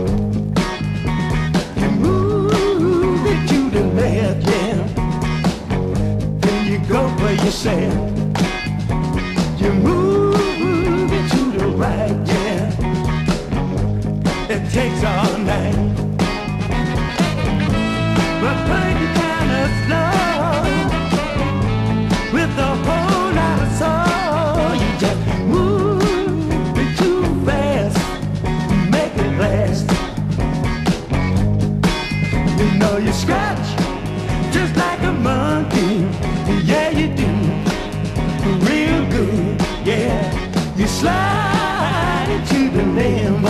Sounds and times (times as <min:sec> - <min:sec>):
Music: 0:00.0 - 0:43.4.